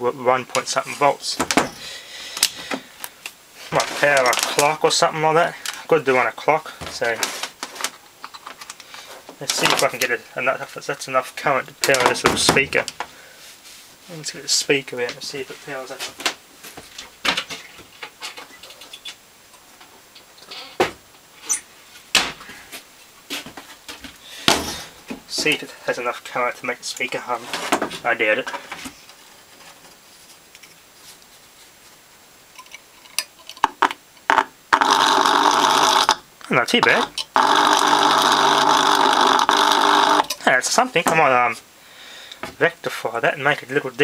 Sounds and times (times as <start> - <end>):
Speech: 0.0 - 1.5, 3.7 - 7.3, 9.4 - 12.9, 14.1 - 16.1, 25.3 - 28.6, 36.5 - 37.1, 40.4 - 41.6, 42.6 - 44.0.